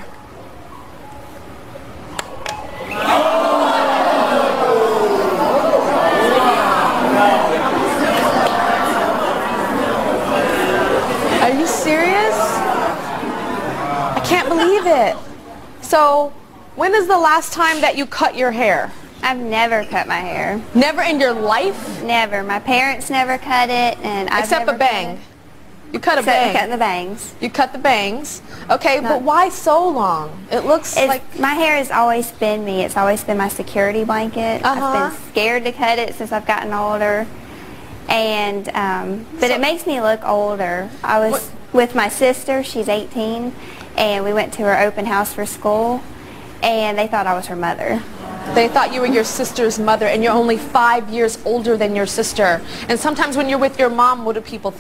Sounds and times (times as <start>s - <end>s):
Female speech, woman speaking: 11.4s - 12.6s, 14.2s - 25.3s, 25.9s - 37.3s, 38.1s - 46.0s, 46.6s - 54.8s.